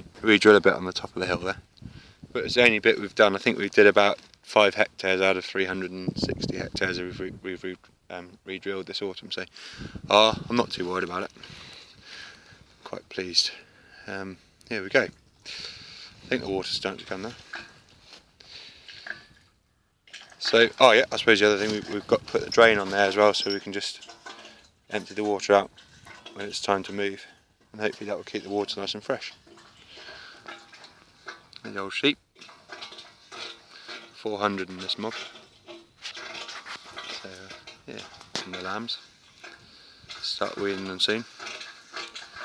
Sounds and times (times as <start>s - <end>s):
Speech: 0.2s - 1.6s, 2.4s - 9.5s, 10.1s - 11.3s, 12.8s - 15.1s, 16.3s - 17.4s, 20.4s - 24.0s, 24.9s - 25.7s, 26.4s - 29.4s, 31.6s - 32.2s, 34.2s - 35.2s, 37.2s - 39.0s, 40.2s - 41.3s.